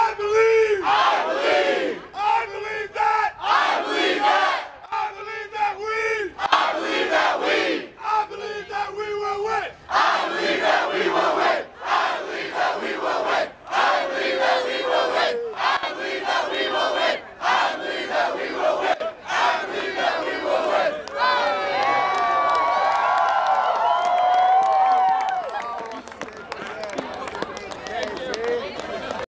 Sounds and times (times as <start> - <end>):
Speech: 4.9 - 6.4, 8.0 - 9.8, 25.6 - 29.3.